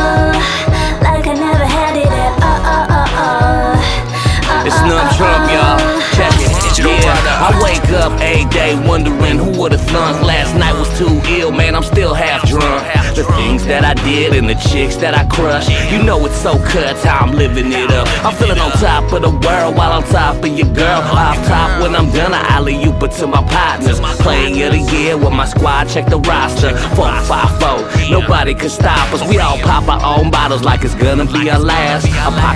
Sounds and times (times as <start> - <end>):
Music: 0.0 - 32.5.